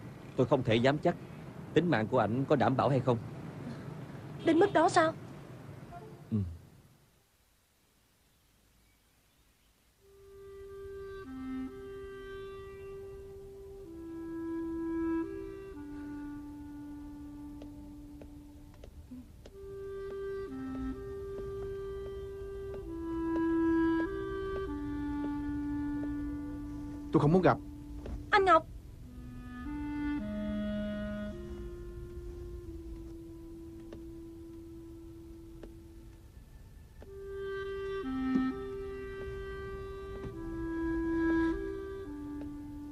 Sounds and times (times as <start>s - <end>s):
Music: 10.0s - 42.9s
Tap: 17.6s - 23.5s.